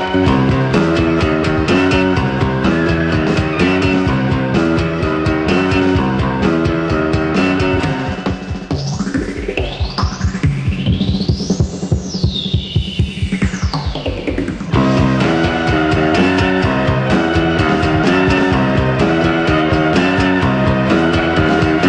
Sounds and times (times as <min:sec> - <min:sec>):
Music: 0:00.0 - 0:21.8.